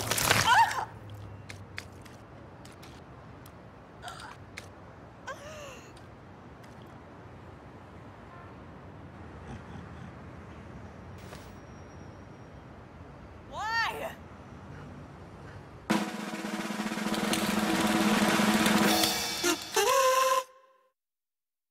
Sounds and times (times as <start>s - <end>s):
Speech: 13.5s - 14.2s.